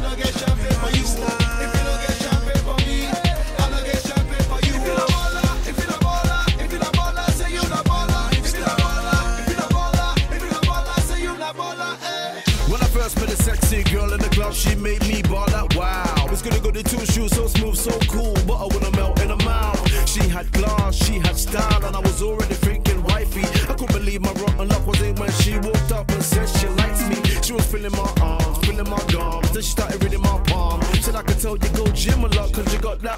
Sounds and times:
Music: 0.0s - 33.1s.

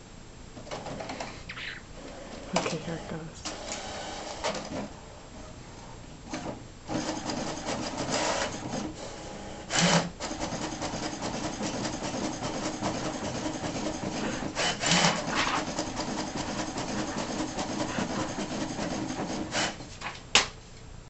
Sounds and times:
Printer: 2.0s - 5.1s, 5.8s - 20.2s.

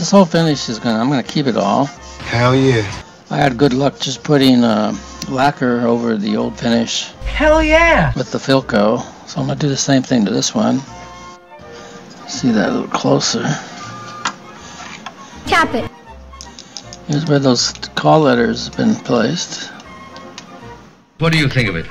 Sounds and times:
Speech: 0.0s - 10.8s, 21.2s - 21.9s
Music: 0.0s - 21.9s.

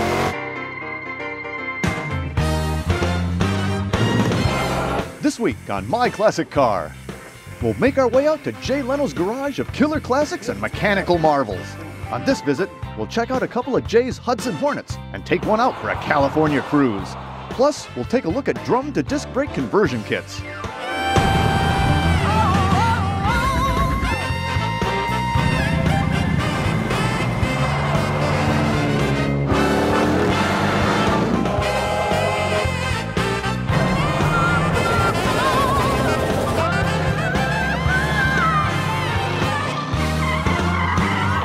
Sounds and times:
Drum kit: 20.9s - 41.4s.

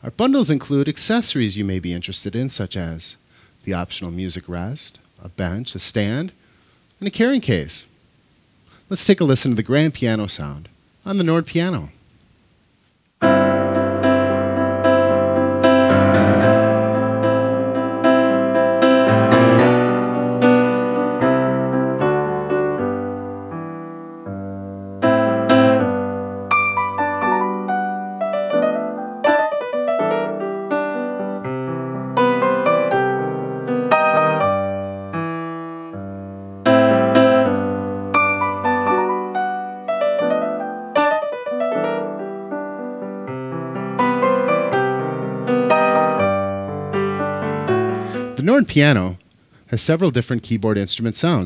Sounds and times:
Speech: 0.0s - 6.4s, 7.0s - 7.9s, 8.9s - 12.0s, 48.4s - 51.4s.

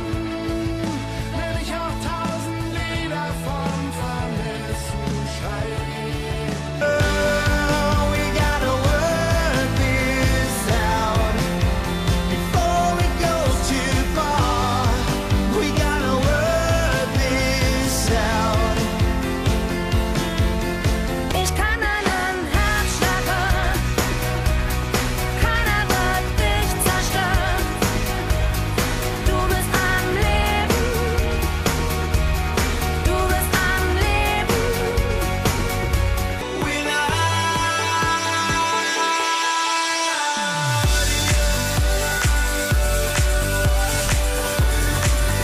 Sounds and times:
Music: 0.0s - 45.4s.

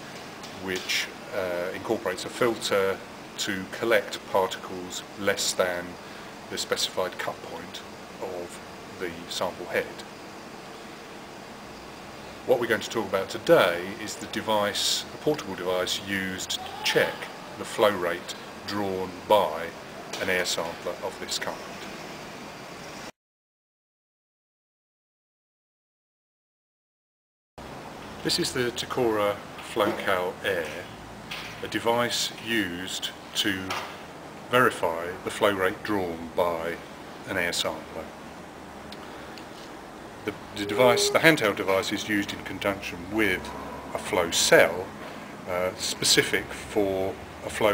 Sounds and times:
Speech: 0.6s - 10.1s, 12.5s - 21.9s, 28.2s - 31.0s, 31.6s - 33.9s, 34.5s - 38.1s, 40.2s - 44.9s, 45.5s - 47.7s.

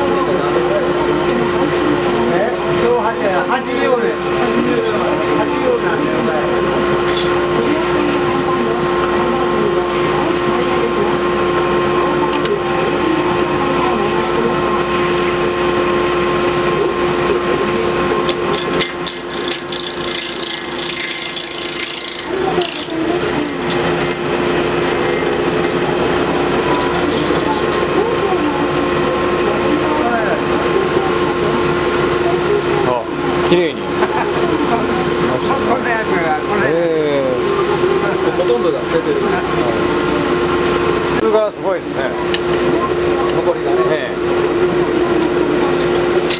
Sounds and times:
Speech: 0.0s - 18.3s, 22.3s - 24.0s, 25.6s - 46.3s.

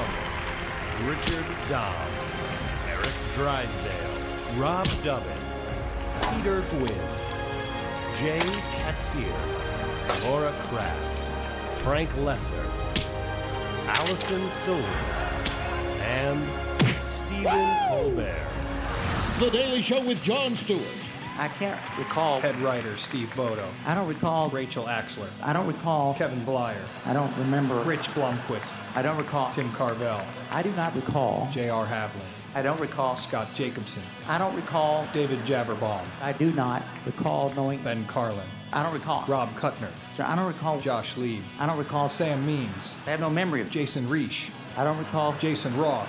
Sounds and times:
Music: 0.0s - 46.0s
Speech: 19.4s - 46.0s.

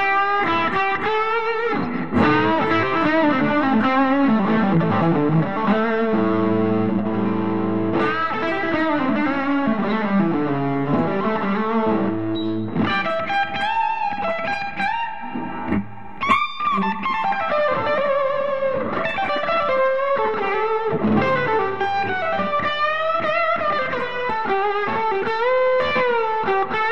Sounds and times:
Music: 0.0s - 26.9s.

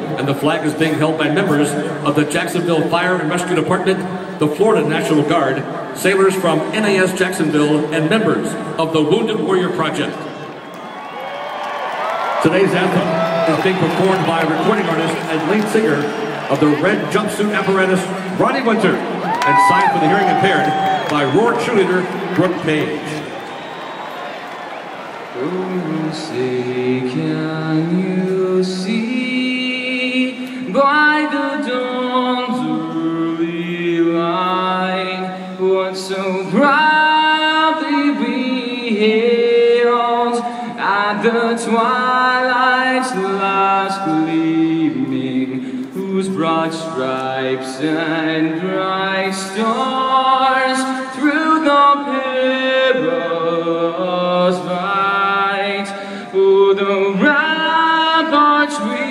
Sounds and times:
Speech: 0.0s - 10.2s, 12.4s - 23.2s
Male singing: 25.4s - 59.1s.

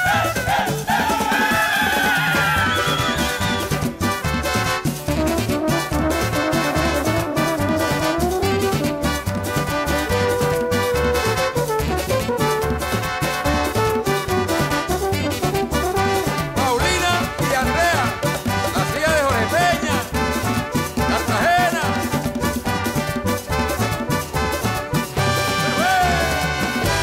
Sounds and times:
Music: 0.0s - 27.0s.

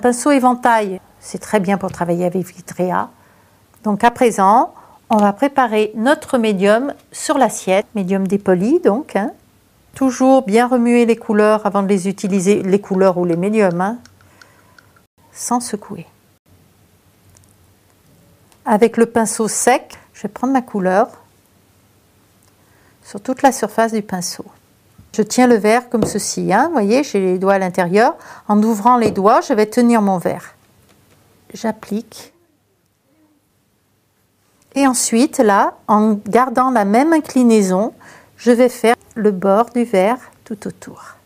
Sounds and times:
Speech: 0.0s - 3.2s, 3.8s - 9.4s, 10.0s - 14.0s, 15.4s - 16.2s, 18.7s - 21.3s, 23.1s - 30.6s, 31.5s - 32.6s, 34.8s - 41.2s.

